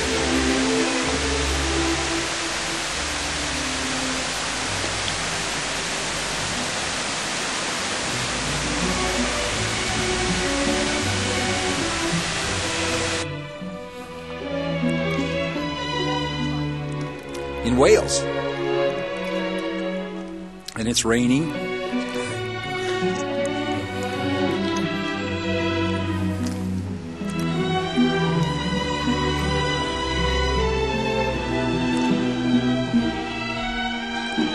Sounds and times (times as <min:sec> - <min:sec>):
Pink noise: 0:00.0 - 0:13.8.